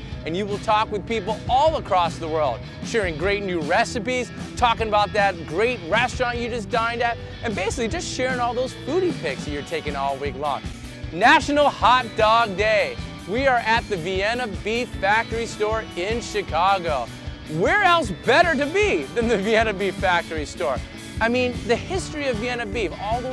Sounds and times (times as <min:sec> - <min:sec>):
Music: 0:00.0 - 0:23.3
Speech: 0:00.2 - 0:10.6, 0:11.2 - 0:23.3.